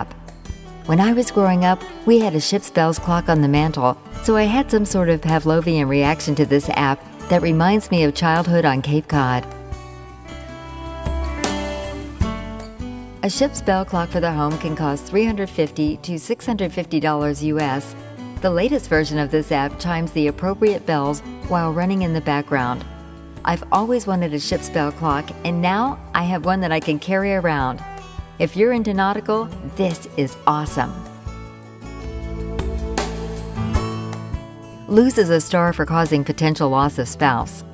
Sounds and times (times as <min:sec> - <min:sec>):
Music: 0:00.0 - 0:37.7
Speech: 0:00.9 - 0:09.5, 0:13.2 - 0:22.8, 0:23.5 - 0:27.8, 0:28.4 - 0:31.0, 0:34.9 - 0:37.7.